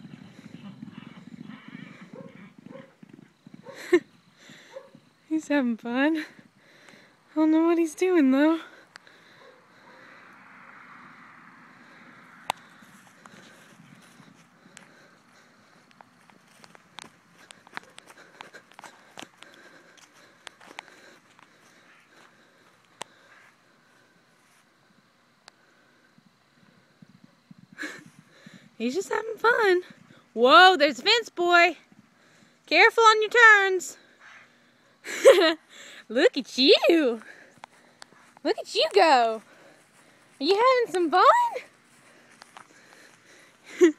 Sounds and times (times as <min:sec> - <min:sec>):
Clip-clop: 0:00.0 - 0:05.2, 0:12.0 - 0:23.5, 0:24.9 - 0:31.1, 0:31.8 - 0:32.1
Speech: 0:36.1 - 0:37.3, 0:38.4 - 0:39.4, 0:40.4 - 0:41.7.